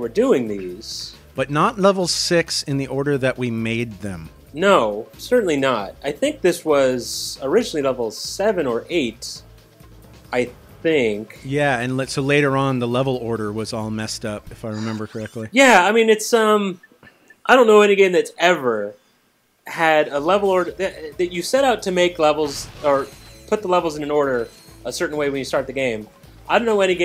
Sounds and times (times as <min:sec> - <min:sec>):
Speech: 0:00.0 - 0:09.4, 0:10.4 - 0:16.8, 0:17.5 - 0:19.0, 0:19.7 - 0:27.0
Music: 0:00.0 - 0:15.6, 0:19.8 - 0:27.0.